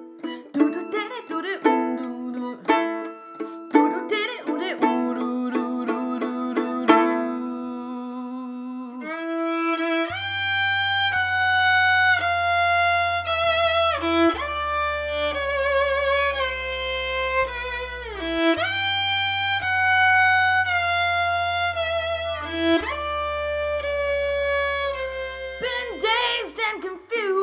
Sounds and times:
Violin, fiddle: 0:00.0 - 0:27.4.

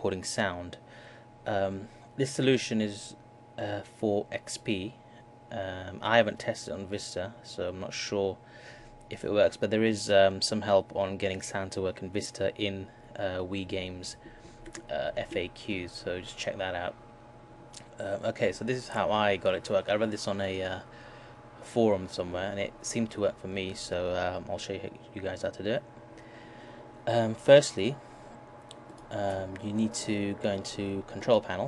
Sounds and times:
Speech: 0:00.0 - 0:00.8, 0:01.5 - 0:08.4, 0:09.1 - 0:14.2, 0:14.8 - 0:17.0, 0:17.8 - 0:20.9, 0:21.6 - 0:25.9, 0:27.1 - 0:28.0, 0:29.1 - 0:31.6.

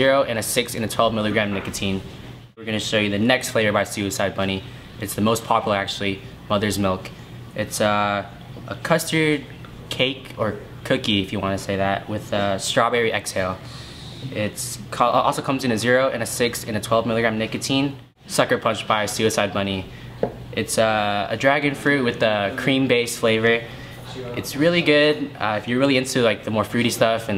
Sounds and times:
Speech: 0:00.0 - 0:19.9, 0:20.6 - 0:27.3.

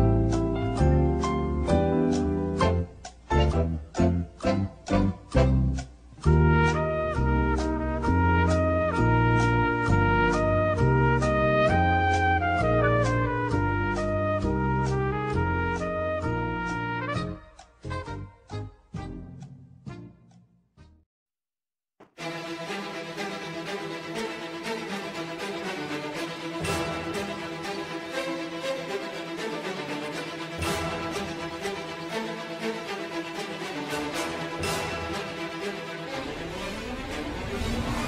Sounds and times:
Music: 0:00.0 - 0:21.1, 0:22.0 - 0:38.0.

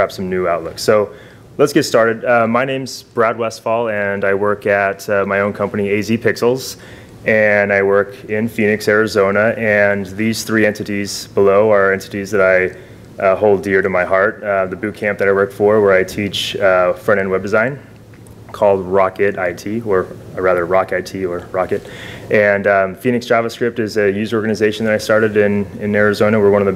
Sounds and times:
Speech: 0:00.0 - 0:17.9, 0:18.5 - 0:26.7.

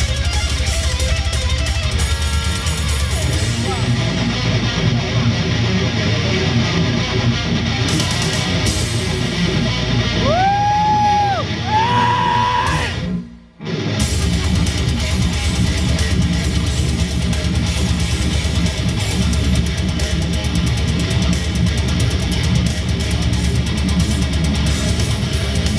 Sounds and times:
Electric guitar: 0:00.0 - 0:25.7.

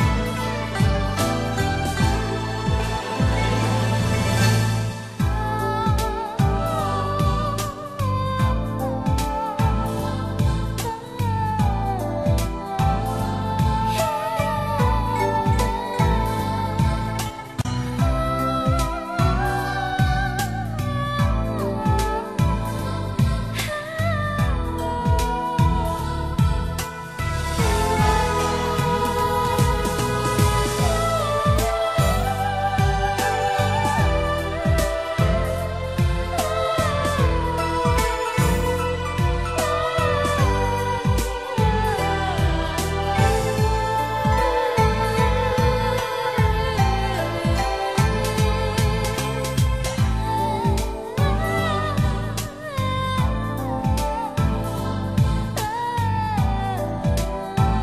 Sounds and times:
Background music: 0:00.0 - 0:57.8.

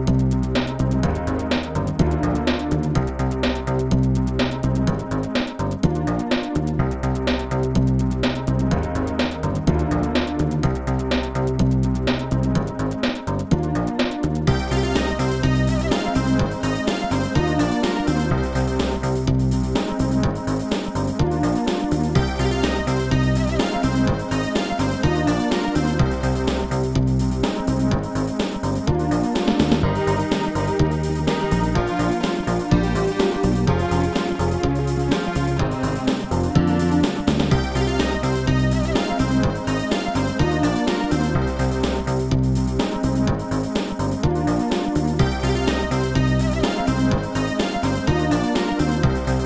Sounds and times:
Soundtrack music: 0:00.0 - 0:49.4
Video game music: 0:00.0 - 0:49.4.

